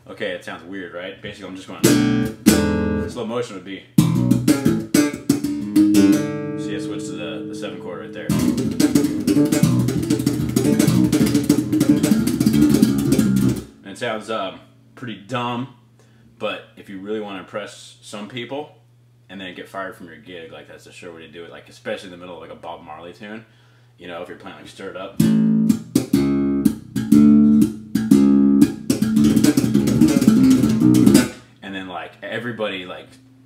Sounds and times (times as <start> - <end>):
Speech: 0.0 - 1.9, 3.1 - 4.0, 6.6 - 8.5, 13.8 - 15.8, 16.4 - 25.3, 31.6 - 33.2
Bass guitar: 1.7 - 3.3, 4.0 - 13.8, 25.2 - 31.5.